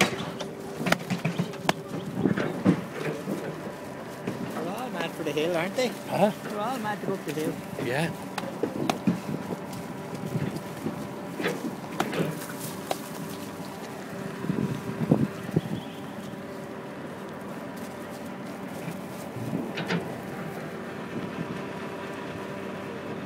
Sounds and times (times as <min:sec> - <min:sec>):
Vehicle: 0:00.0 - 0:23.2.